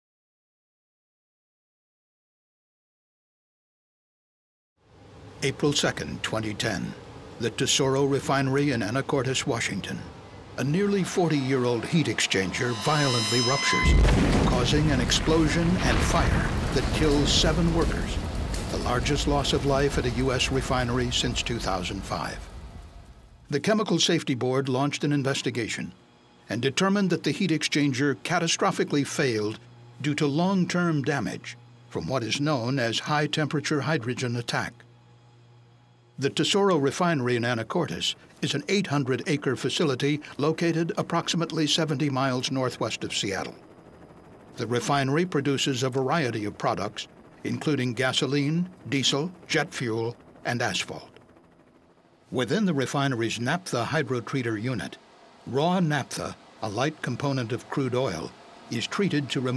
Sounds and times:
Speech: 5.4 - 22.5, 23.5 - 34.8, 36.2 - 43.6, 44.6 - 51.2, 52.3 - 59.5.

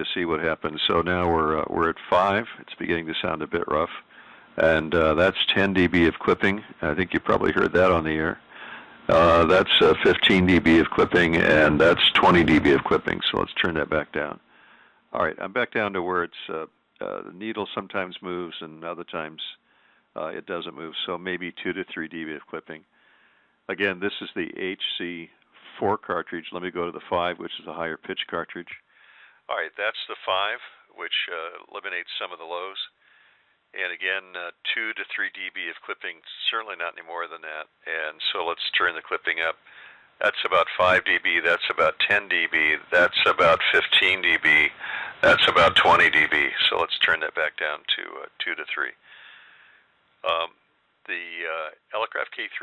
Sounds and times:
Speech: 0.0 - 8.5, 9.1 - 14.4, 15.2 - 19.6, 20.2 - 22.9, 23.7 - 28.9, 29.5 - 33.0, 33.8 - 39.6, 40.2 - 49.0, 50.2 - 52.6.

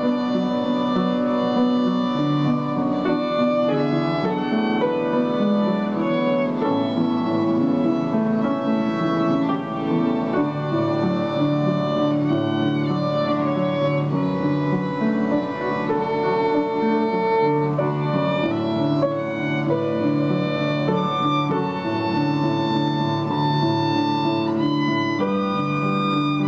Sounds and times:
Violin, fiddle: 0.0 - 26.4.

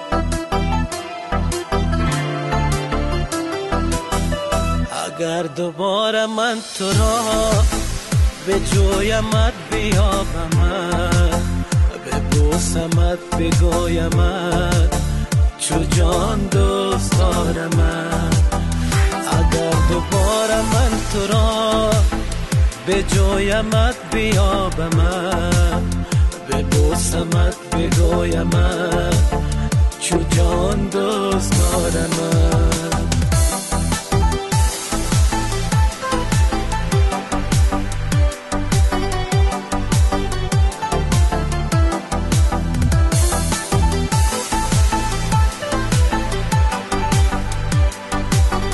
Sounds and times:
Soundtrack music: 0.0 - 48.7.

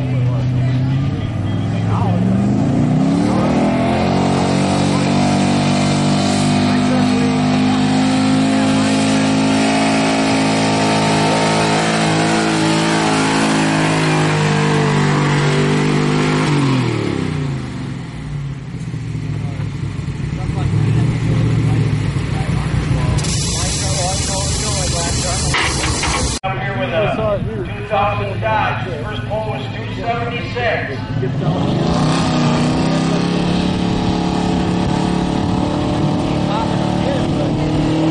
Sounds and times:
Speech: 0.0 - 2.3, 6.6 - 7.8, 19.3 - 19.7, 20.3 - 31.7, 36.2 - 37.8
Truck: 0.0 - 38.1.

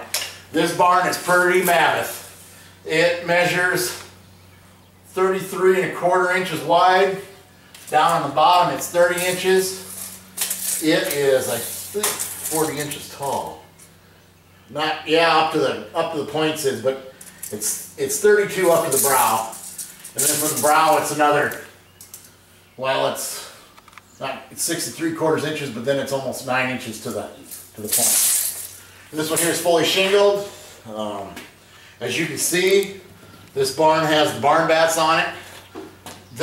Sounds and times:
Speech: 0.6 - 2.3, 2.9 - 4.1, 5.1 - 9.9, 10.8 - 13.7, 14.7 - 19.6, 20.2 - 21.7, 22.8 - 23.6, 24.2 - 28.3, 29.1 - 33.0, 33.6 - 35.4.

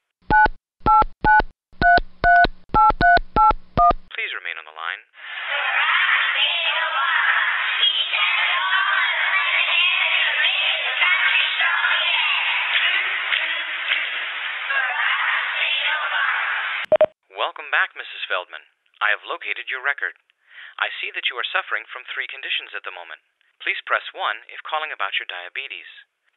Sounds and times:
Speech: 4.1 - 5.7, 17.3 - 20.2, 20.8 - 26.1.

